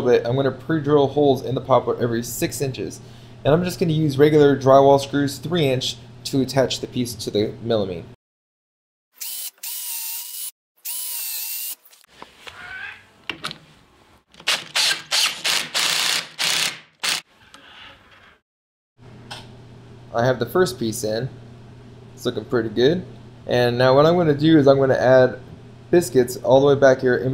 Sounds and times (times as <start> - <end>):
Speech: 0.0 - 8.2, 20.1 - 21.4, 22.2 - 27.3
Drill: 9.2 - 12.1, 14.4 - 17.3.